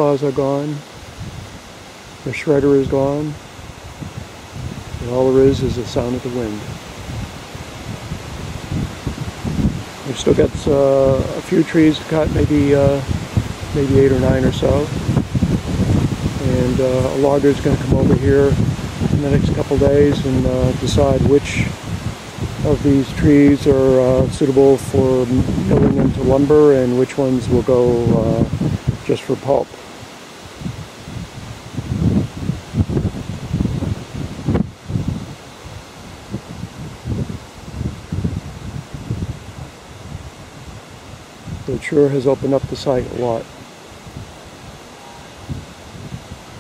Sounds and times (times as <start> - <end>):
Mechanical fan: 0.0 - 46.6.